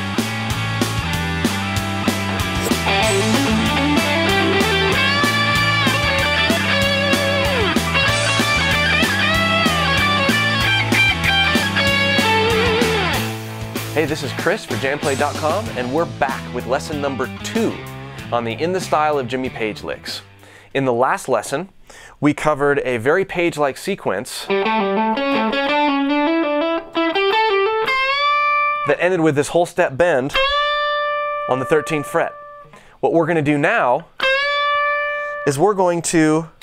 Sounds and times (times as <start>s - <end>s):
Speech: 14.0s - 24.5s, 28.9s - 30.4s, 31.5s - 32.4s, 33.0s - 34.1s, 35.4s - 36.6s.